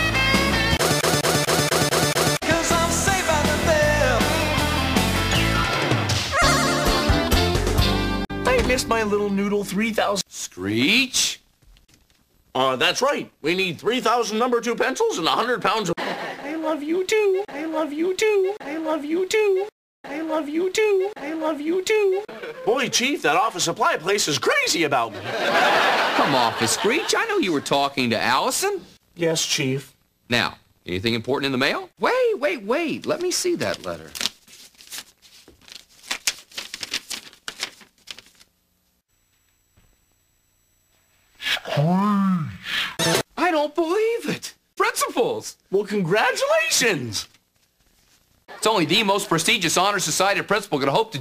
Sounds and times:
Speech: 8.4 - 11.4, 12.6 - 25.2, 26.2 - 34.2, 43.4 - 47.3, 48.5 - 51.2.

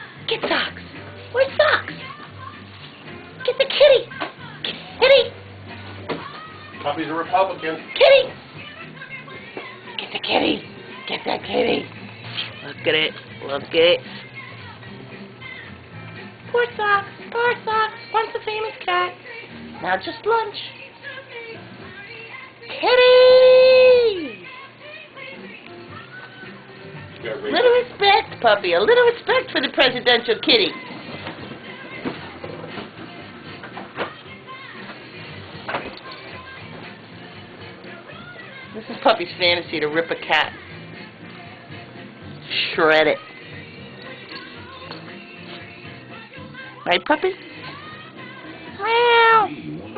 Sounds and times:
Music: 0.0 - 49.9.

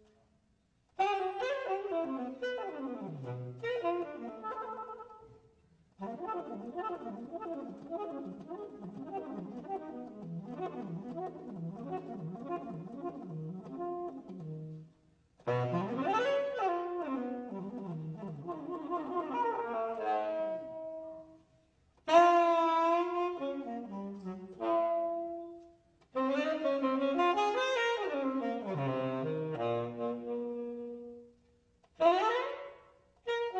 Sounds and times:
Inside, large room or hall: 0.0 - 33.5
Saxophone: 0.9 - 33.5
Classical music: 1.0 - 21.5, 22.1 - 31.4.

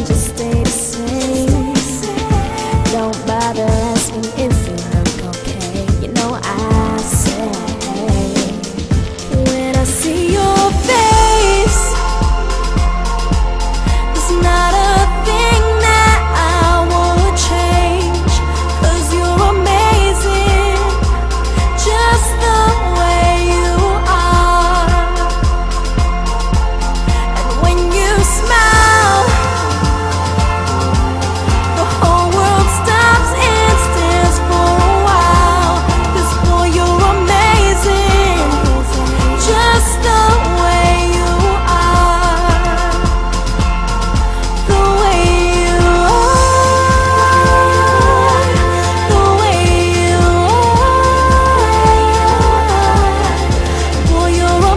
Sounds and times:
Pop music: 0.0 - 54.7.

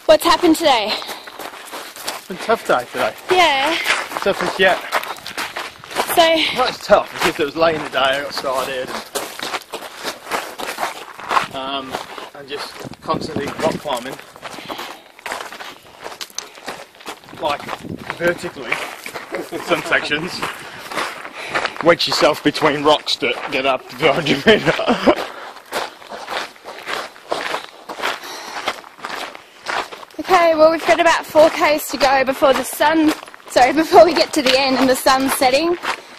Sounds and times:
Run: 0.1 - 36.1.

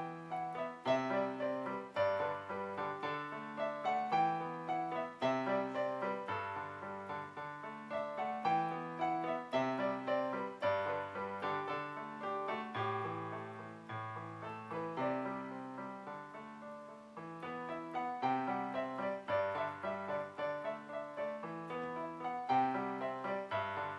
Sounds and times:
Music: 0.0 - 23.9.

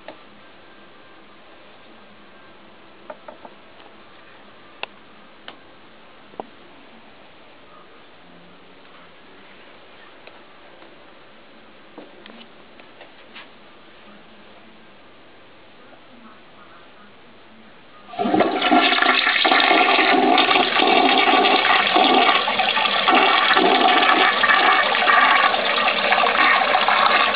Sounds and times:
Toilet flush: 18.1 - 27.3.

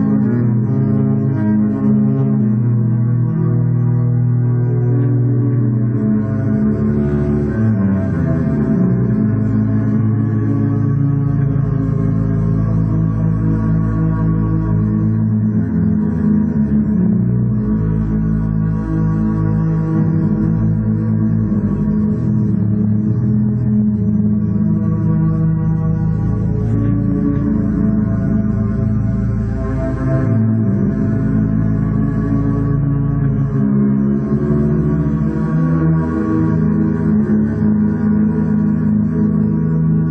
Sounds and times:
Double bass: 0.0 - 40.1.

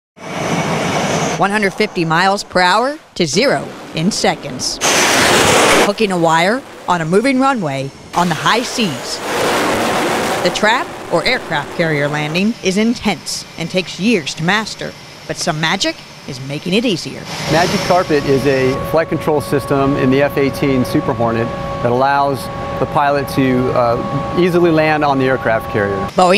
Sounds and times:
Fixed-wing aircraft, airplane: 0.2 - 26.3.

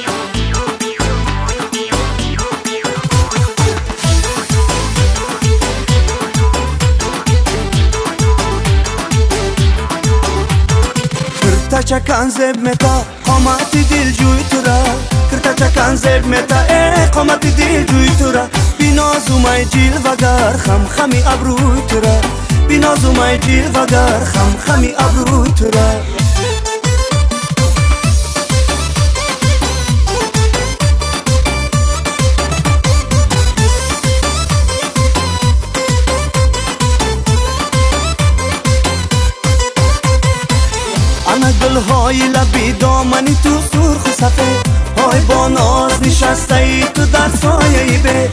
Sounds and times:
Music: 0.0 - 48.3.

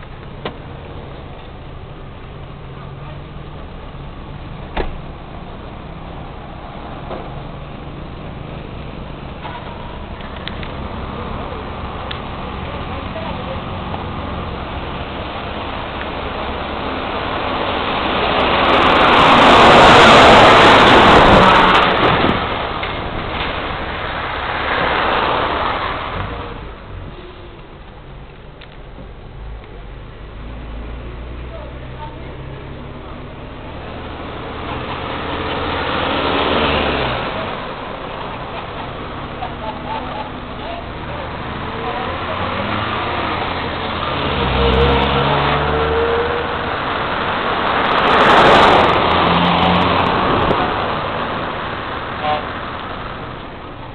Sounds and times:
Outside, rural or natural: 0.0 - 53.9
Vehicle: 0.0 - 53.9.

